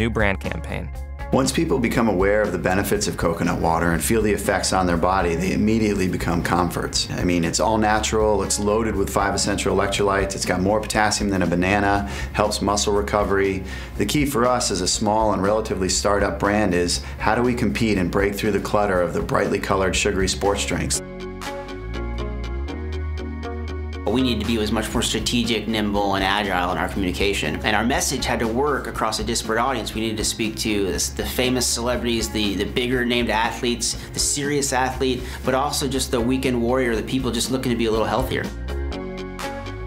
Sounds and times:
Speech: 0:00.0 - 0:21.0, 0:24.1 - 0:38.6
Music: 0:00.0 - 0:39.8.

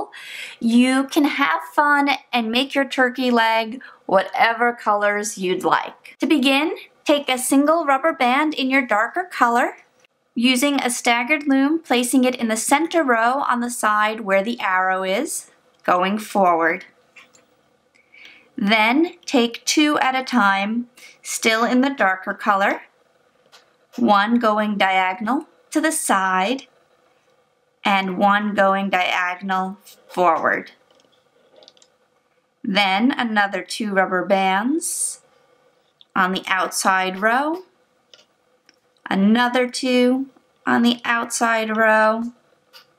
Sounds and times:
Speech: 0:00.0 - 0:09.8, 0:10.4 - 0:16.9, 0:18.6 - 0:22.9, 0:24.0 - 0:26.7, 0:27.8 - 0:30.8, 0:32.7 - 0:35.2, 0:36.1 - 0:37.7, 0:39.1 - 0:42.4.

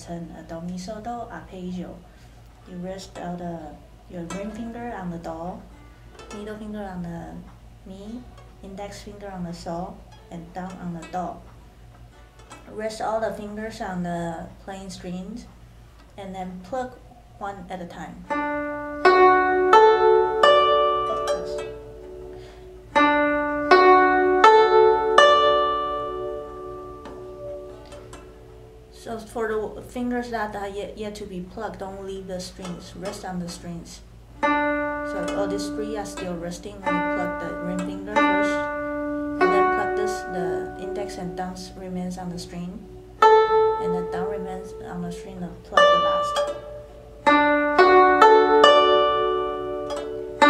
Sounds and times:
Speech: 0:00.0 - 0:02.0, 0:02.7 - 0:05.7, 0:06.4 - 0:11.4, 0:12.7 - 0:15.6, 0:16.2 - 0:18.2, 0:28.9 - 0:34.1, 0:35.1 - 0:38.7, 0:39.5 - 0:42.9, 0:43.8 - 0:46.4
Music: 0:10.0 - 0:13.5, 0:18.3 - 0:29.5, 0:34.4 - 0:50.4.

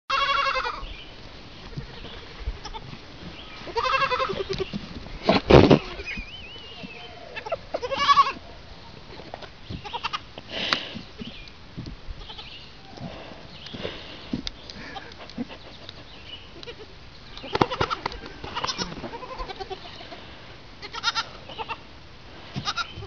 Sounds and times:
Goat: 0:01.6 - 0:11.5, 0:12.2 - 0:21.8, 0:22.5 - 0:23.0.

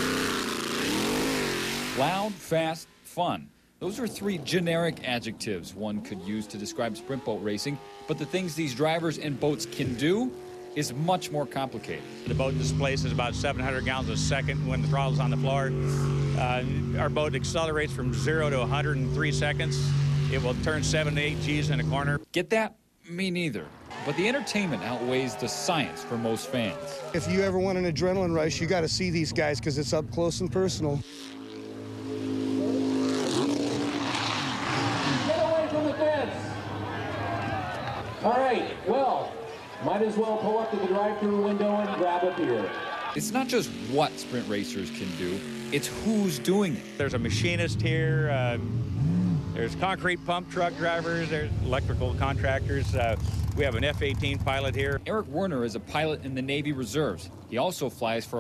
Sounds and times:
Speech: 0:02.0 - 0:31.0, 0:35.2 - 0:36.5, 0:38.2 - 0:48.6, 0:49.6 - 0:58.4.

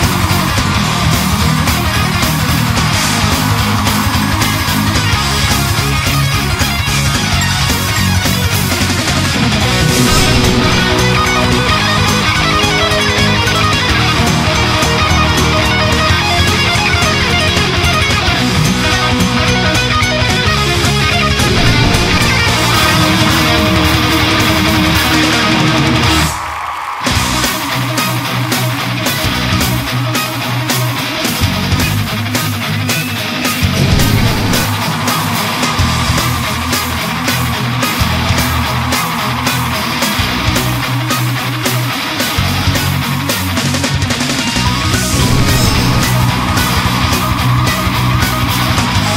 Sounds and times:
Music: 0:00.0 - 0:49.1.

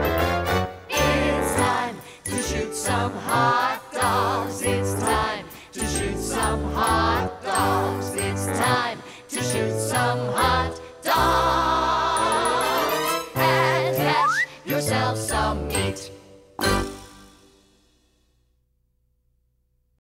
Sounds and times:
Music: 0:00.0 - 0:18.4.

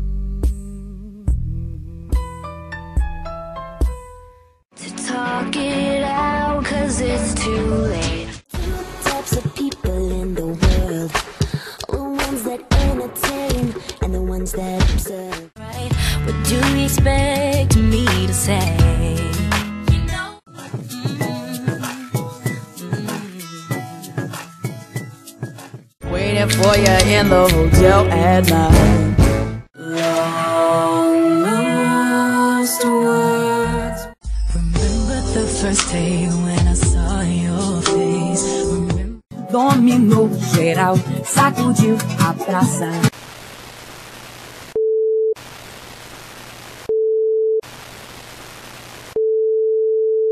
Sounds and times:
Music: 0:00.0 - 0:43.1.

